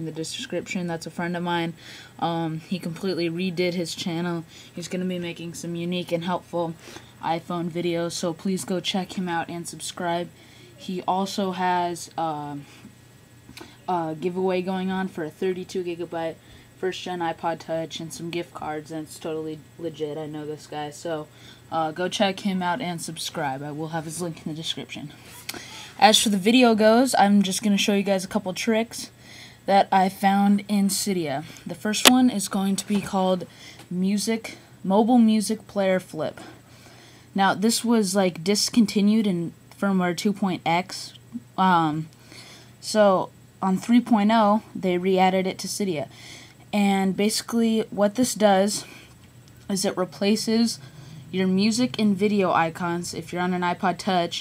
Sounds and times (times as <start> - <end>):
Speech: 0.0 - 12.7, 13.6 - 25.2, 26.0 - 29.1, 29.7 - 36.6, 37.4 - 42.1, 42.8 - 46.1, 46.7 - 48.9, 49.7 - 54.4.